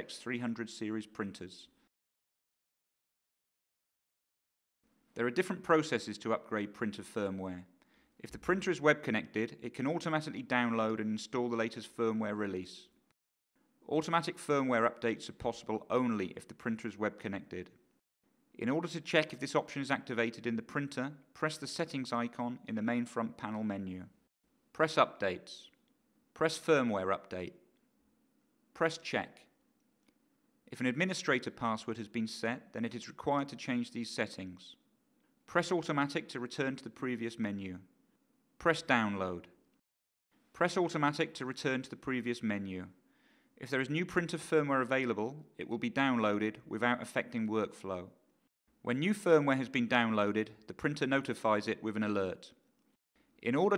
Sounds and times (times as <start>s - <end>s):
Speech: 0.0s - 1.8s, 5.2s - 13.0s, 13.8s - 17.8s, 18.6s - 24.2s, 24.8s - 25.8s, 26.4s - 27.6s, 28.8s - 29.5s, 30.7s - 34.8s, 35.5s - 37.9s, 38.6s - 39.6s, 40.6s - 43.0s, 43.6s - 48.2s, 48.9s - 52.6s, 53.4s - 53.7s.